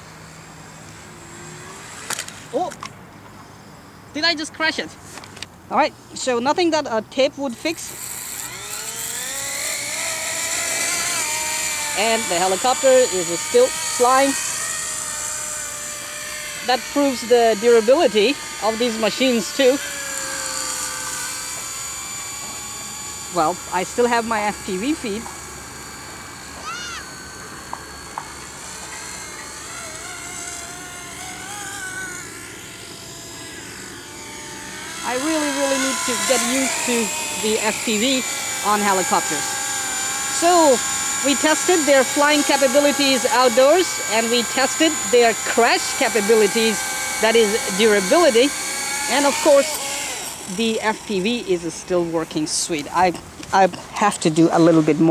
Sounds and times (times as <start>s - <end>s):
Outside, rural or natural: 0.0s - 55.1s
Speech: 12.0s - 14.4s, 16.7s - 19.8s, 23.3s - 25.2s, 35.0s - 39.5s, 40.4s - 48.5s, 49.1s - 49.8s, 50.5s - 55.1s.